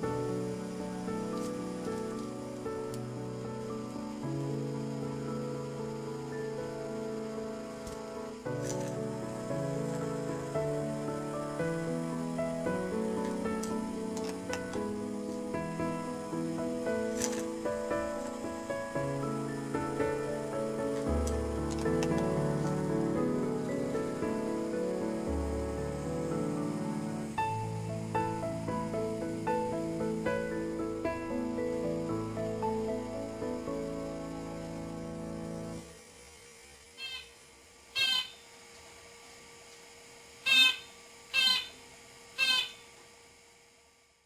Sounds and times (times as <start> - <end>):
Music: 0.0 - 36.0
Bird: 37.0 - 37.3, 38.0 - 38.4, 40.5 - 41.8, 42.4 - 42.8
Domestic animals, pets: 37.0 - 37.3, 38.0 - 38.4, 40.5 - 41.8, 42.4 - 42.8.